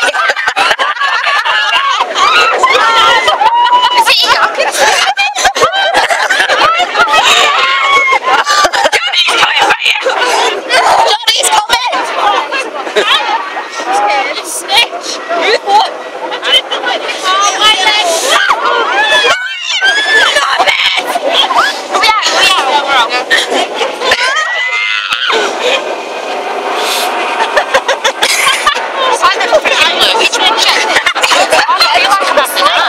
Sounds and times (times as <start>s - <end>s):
Outside, urban or manmade: 0.0s - 32.8s
Speech: 29.0s - 32.8s.